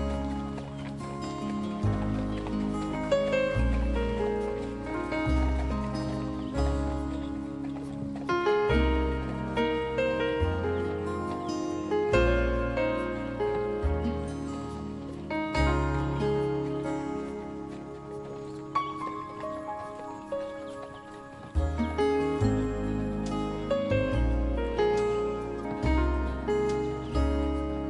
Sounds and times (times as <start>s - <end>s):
Bird: 0.0s - 12.5s, 15.5s - 24.1s
Music: 0.0s - 27.8s.